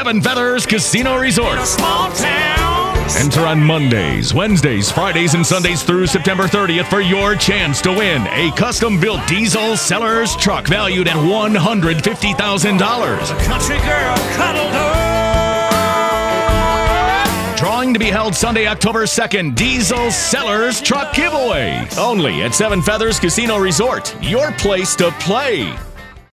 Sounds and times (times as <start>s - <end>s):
Speech: 0.0s - 1.8s, 3.1s - 14.3s, 17.6s - 25.8s
Music: 0.0s - 26.3s.